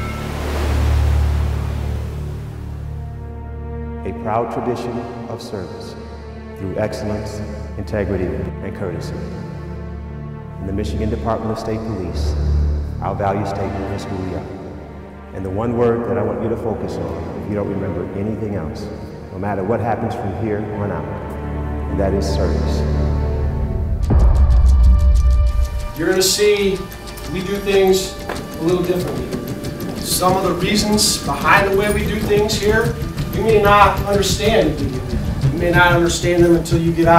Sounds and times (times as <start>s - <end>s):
Music: 0.0s - 37.1s
Speech: 4.0s - 6.0s, 6.6s - 9.4s, 10.6s - 12.4s, 13.0s - 14.6s, 15.3s - 21.2s, 21.9s - 22.9s, 26.0s - 29.4s, 30.0s - 37.1s.